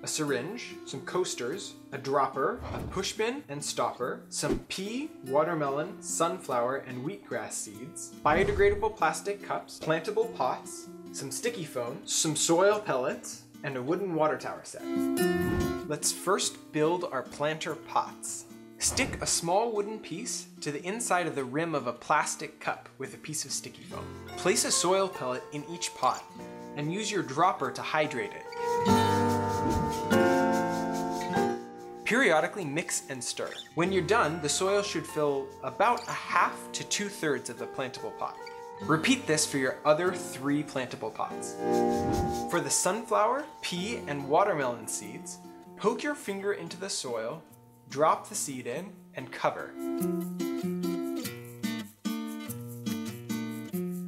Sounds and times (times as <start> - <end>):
Speech: 0.0 - 14.9, 15.9 - 28.5, 32.1 - 41.6, 42.5 - 49.8
Music: 0.0 - 54.0.